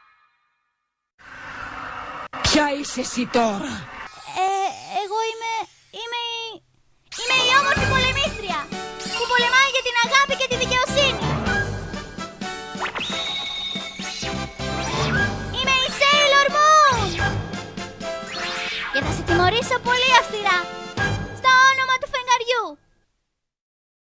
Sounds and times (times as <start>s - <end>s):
Music: 0.0s - 1.0s, 7.2s - 22.2s.